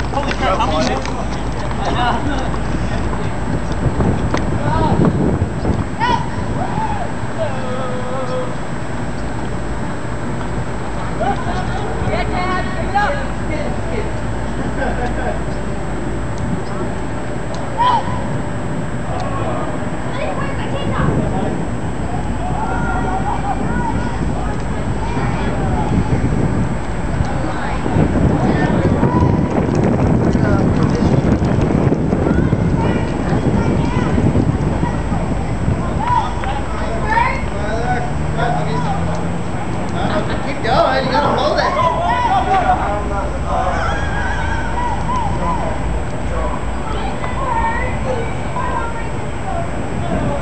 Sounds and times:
Run: 0.0 - 6.2, 28.4 - 34.3.

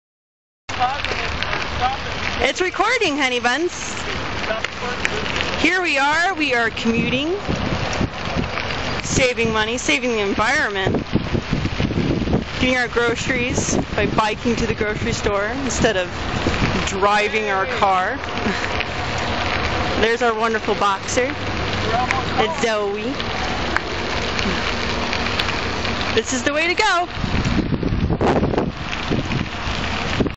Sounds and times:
Bicycle: 0.7 - 30.3
Speech: 16.8 - 18.2, 20.0 - 23.2, 26.2 - 27.1.

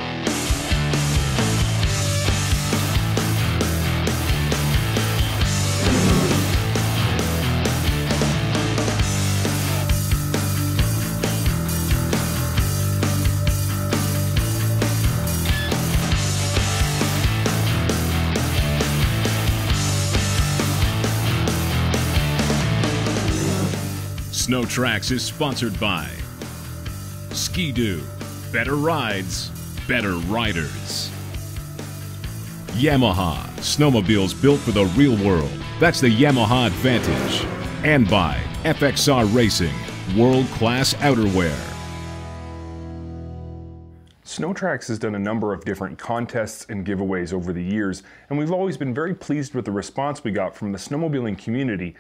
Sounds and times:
Music: 0.0 - 44.2
Speech: 24.3 - 26.3, 27.3 - 31.2, 32.7 - 41.8, 44.2 - 52.0.

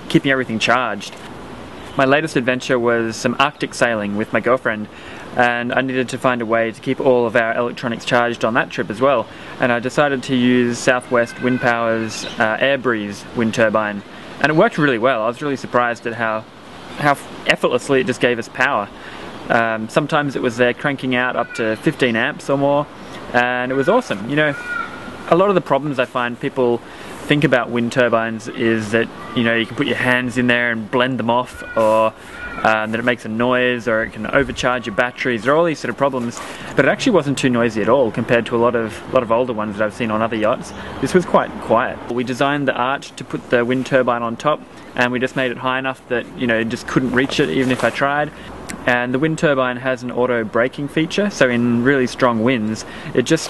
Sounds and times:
Speech: 0.0 - 1.2, 2.0 - 24.7, 25.3 - 53.4.

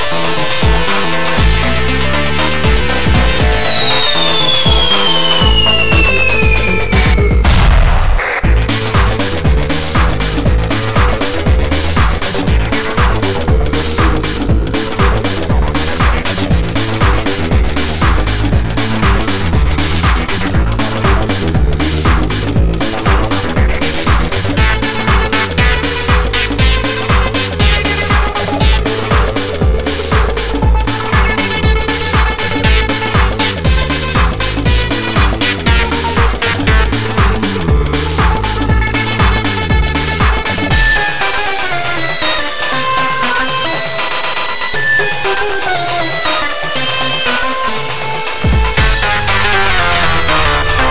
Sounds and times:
Trance music: 0.0 - 50.9.

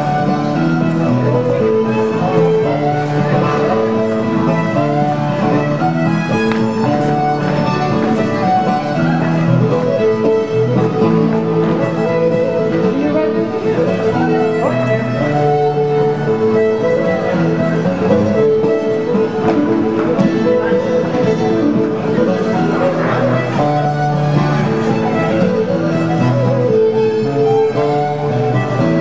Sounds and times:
Music: 0.0 - 29.0.

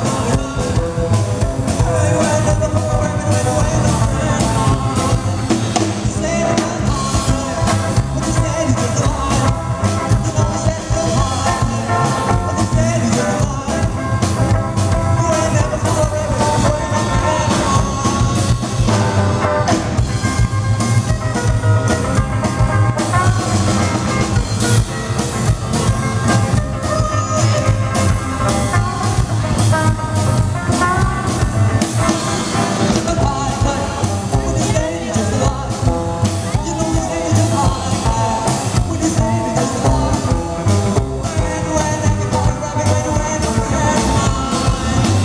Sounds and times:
Drum: 0.0 - 45.2
Drum kit: 0.0 - 45.2.

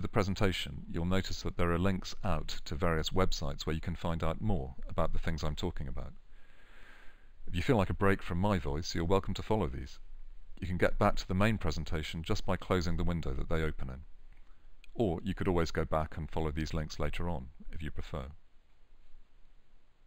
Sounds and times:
Speech: 0.0 - 6.2, 7.5 - 10.0, 10.6 - 14.1, 15.0 - 18.4.

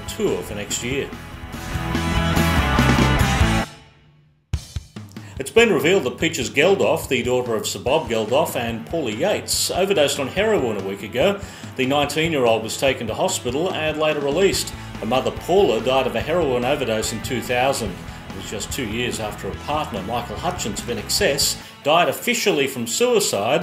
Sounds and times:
Speech: 0.0 - 1.2, 5.4 - 23.6
Soundtrack music: 0.0 - 4.8, 8.0 - 21.8.

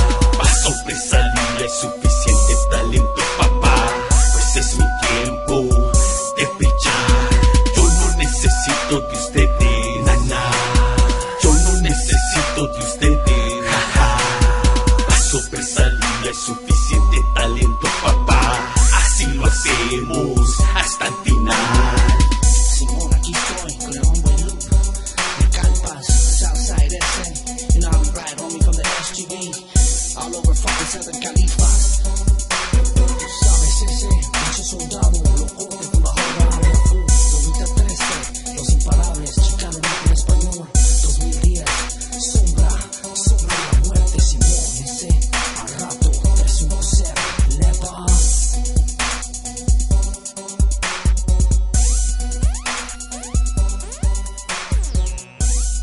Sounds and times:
Hip hop music: 0.0 - 55.8.

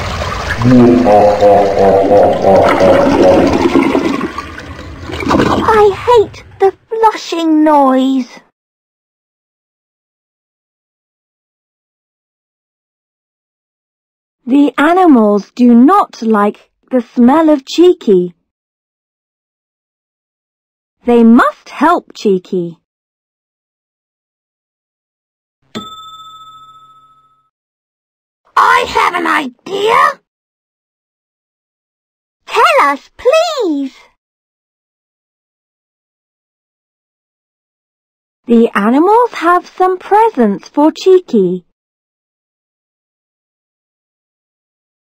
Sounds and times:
Child speech, kid speaking: 5.6 - 8.5, 14.5 - 18.4, 21.0 - 22.8, 28.5 - 30.3, 32.5 - 34.2, 38.5 - 41.7.

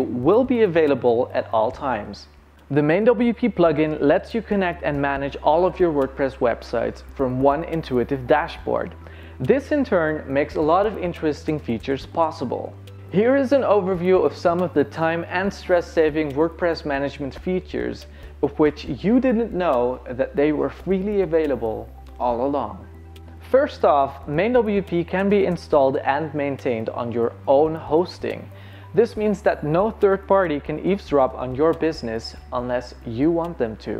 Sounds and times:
Speech: 0.0 - 22.8, 23.4 - 33.9.

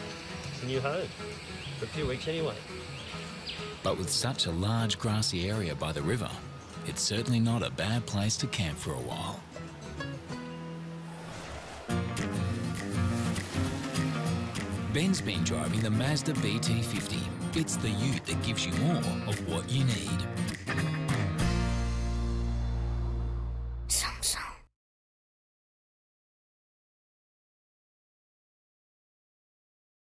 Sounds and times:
Music: 0.0 - 24.6
Speech: 0.6 - 1.1, 1.8 - 2.7, 3.8 - 9.4, 14.9 - 20.3.

